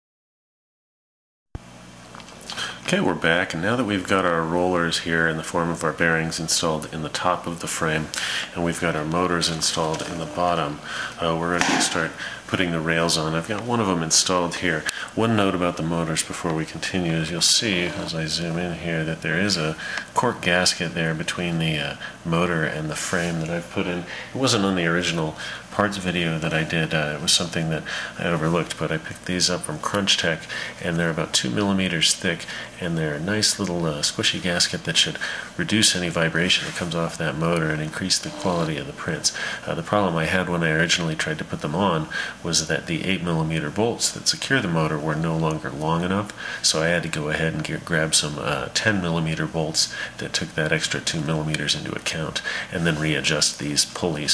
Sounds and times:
Speech: 2.5s - 54.3s.

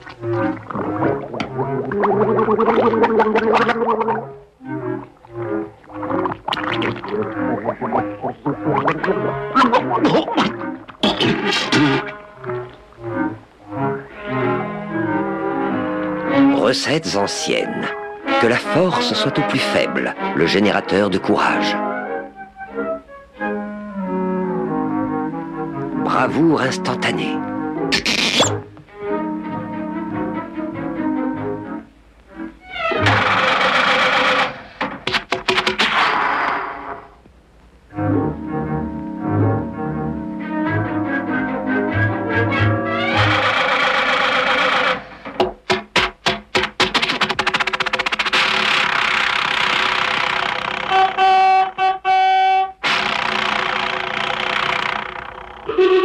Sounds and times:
Music: 0.0s - 52.8s, 54.4s - 56.0s.

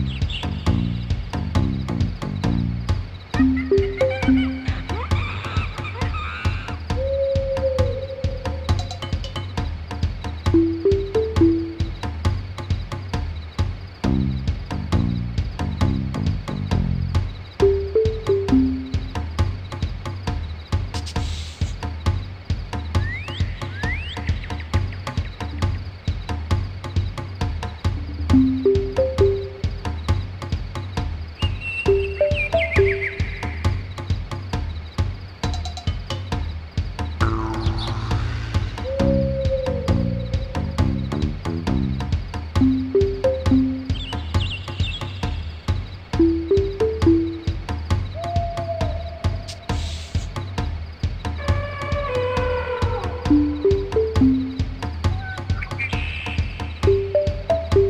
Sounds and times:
Rhythm and blues: 0.0s - 7.0s, 7.8s - 23.0s, 24.3s - 48.1s, 53.3s - 57.8s
Soundtrack music: 10.6s - 12.0s, 28.1s - 29.8s, 42.6s - 44.3s, 46.2s - 47.6s.

